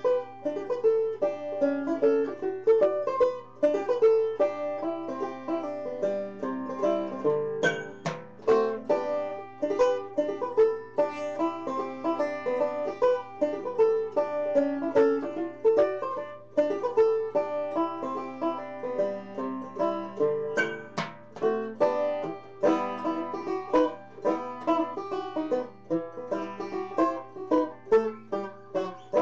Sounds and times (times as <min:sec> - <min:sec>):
Banjo: 0:00.0 - 0:29.2.